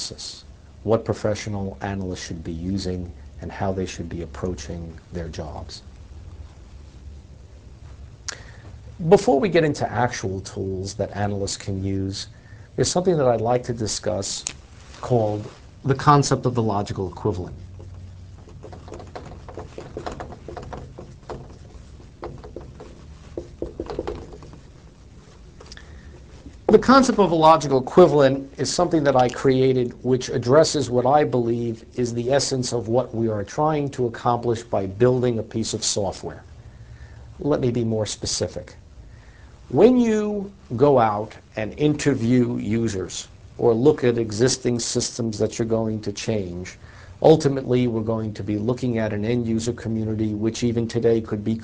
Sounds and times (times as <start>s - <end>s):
Speech: 0.0s - 5.9s, 9.0s - 17.6s, 26.7s - 36.5s, 37.4s - 38.8s, 39.7s - 51.6s.